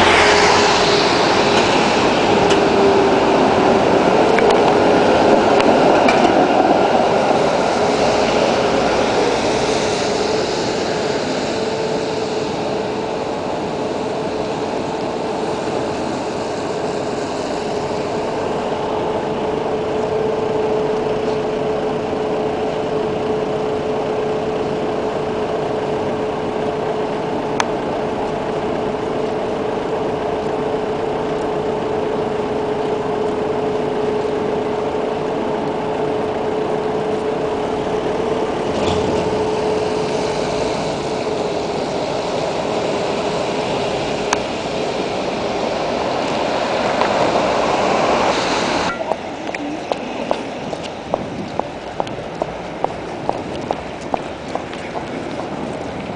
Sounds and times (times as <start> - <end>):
Traffic noise, roadway noise: 0.0 - 56.1
Speech: 48.9 - 50.3.